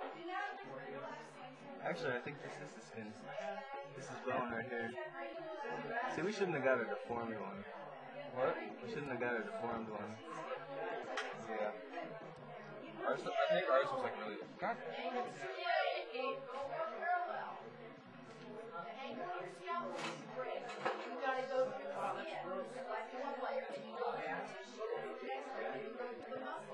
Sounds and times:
Speech: 0:00.0 - 0:26.7.

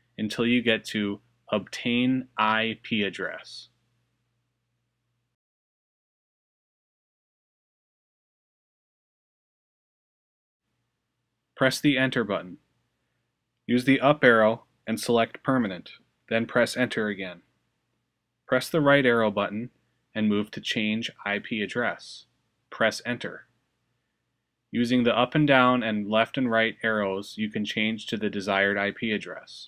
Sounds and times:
Speech: 0:00.2 - 0:03.8, 0:11.6 - 0:12.6, 0:13.7 - 0:17.4, 0:18.5 - 0:23.5, 0:24.8 - 0:29.6.

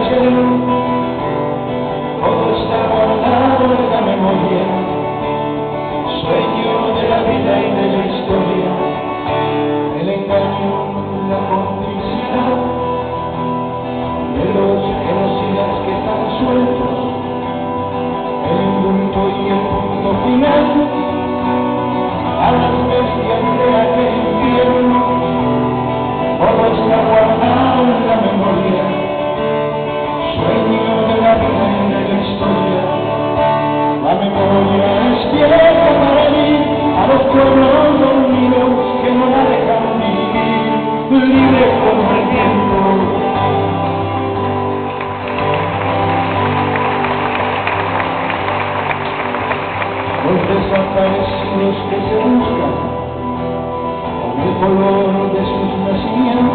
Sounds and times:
Music: 0:00.0 - 0:56.5.

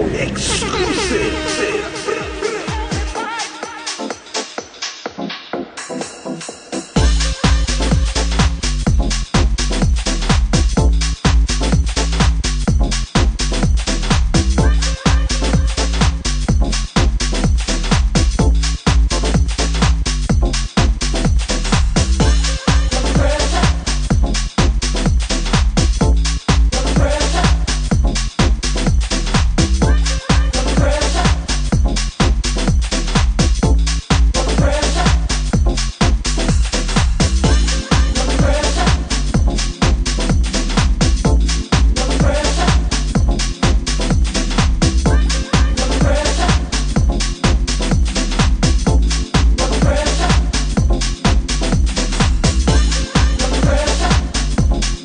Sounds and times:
Music: 0:00.0 - 0:55.0.

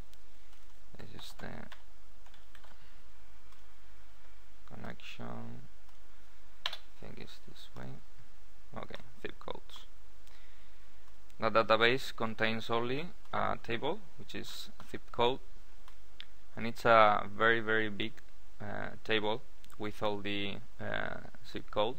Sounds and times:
Speech: 0:01.0 - 0:01.8, 0:04.7 - 0:05.6, 0:07.0 - 0:08.0, 0:08.7 - 0:09.9, 0:11.4 - 0:15.4, 0:16.6 - 0:21.9.

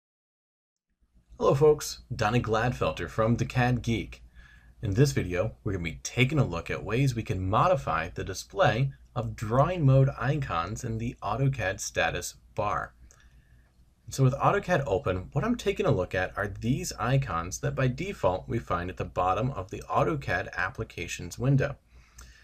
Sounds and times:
Speech: 0:01.4 - 0:04.2, 0:04.8 - 0:13.0, 0:14.1 - 0:21.8.

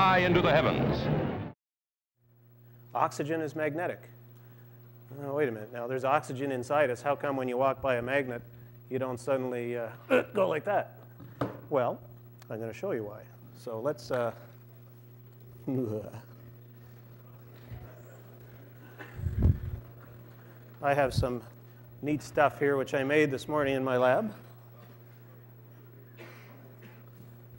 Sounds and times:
Speech: 0:03.0 - 0:04.1, 0:05.1 - 0:10.9, 0:11.7 - 0:14.4, 0:15.6 - 0:16.3, 0:20.8 - 0:24.4.

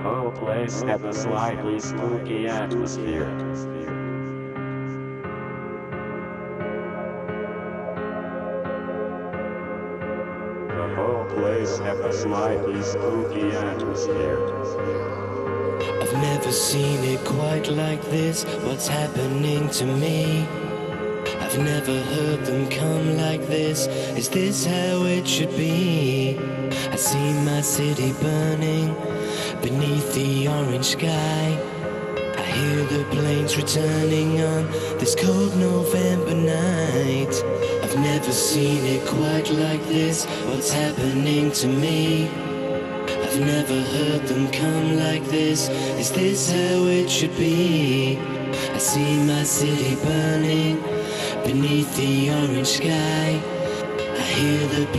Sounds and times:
Soundtrack music: 0:00.0 - 0:54.9.

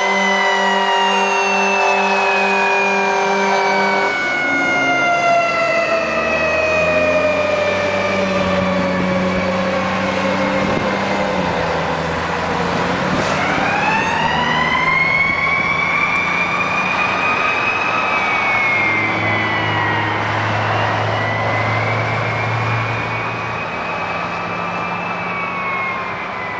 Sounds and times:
Accelerating, revving, vroom: 0:00.0 - 0:24.9
Car: 0:04.1 - 0:26.5.

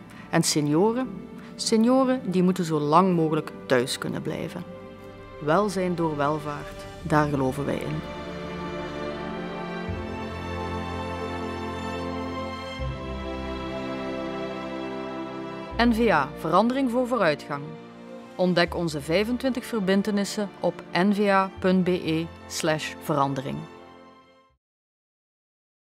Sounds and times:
Music: 0:00.0 - 0:24.6
Speech: 0:00.3 - 0:04.7, 0:05.4 - 0:08.1, 0:15.8 - 0:17.8, 0:18.4 - 0:23.7.

